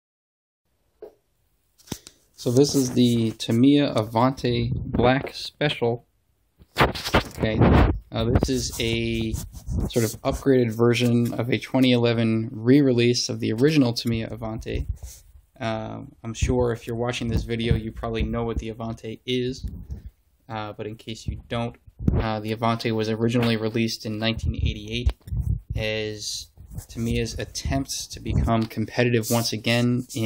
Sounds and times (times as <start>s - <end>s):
Writing: 2.4s - 3.8s, 8.4s - 11.4s, 14.8s - 15.2s, 26.5s - 28.6s, 29.2s - 30.2s.